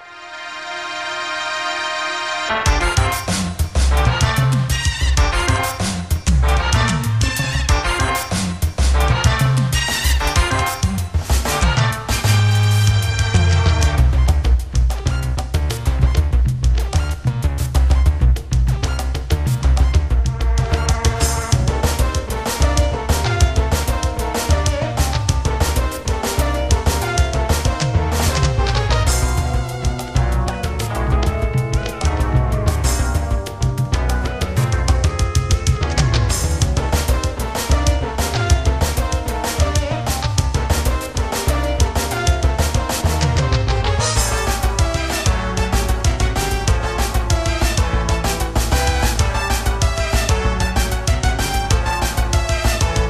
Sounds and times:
Music: 0:00.0 - 0:53.0.

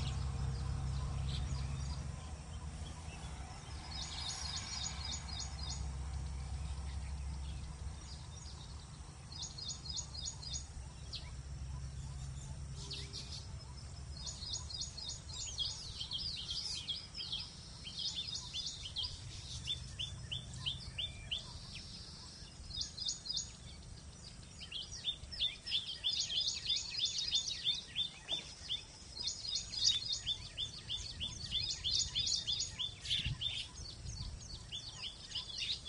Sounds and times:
Bird vocalization, bird call, bird song: 0:00.0 - 0:35.8.

